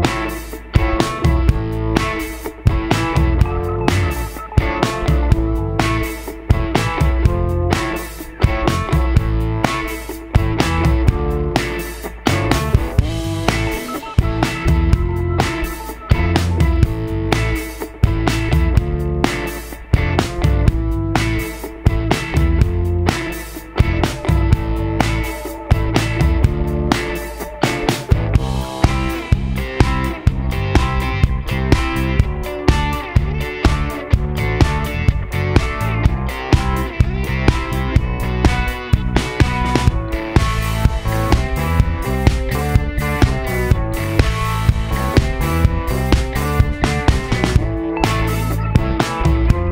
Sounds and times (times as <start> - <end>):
Music: 0.0 - 49.7.